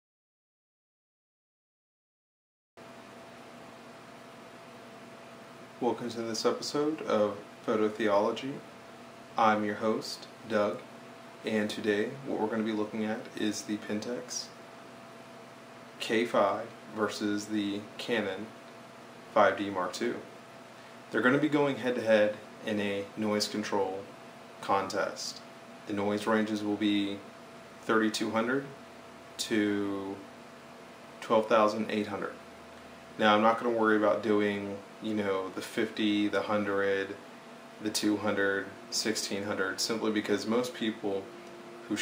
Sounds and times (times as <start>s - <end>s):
Speech: 5.8s - 8.7s, 9.4s - 14.6s, 16.0s - 18.6s, 19.4s - 20.3s, 21.1s - 28.8s, 29.4s - 30.3s, 31.2s - 32.4s, 33.2s - 37.2s, 37.8s - 41.3s.